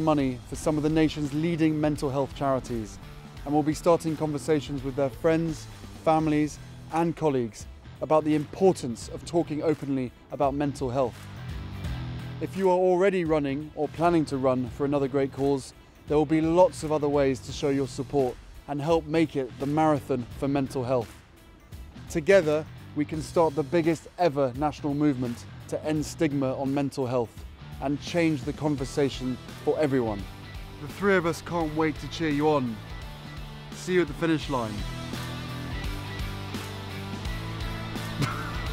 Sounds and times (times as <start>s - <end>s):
Speech: 0.0s - 11.2s, 12.4s - 21.1s, 22.1s - 30.2s, 30.8s - 32.8s, 33.8s - 34.8s
Music: 0.0s - 38.7s.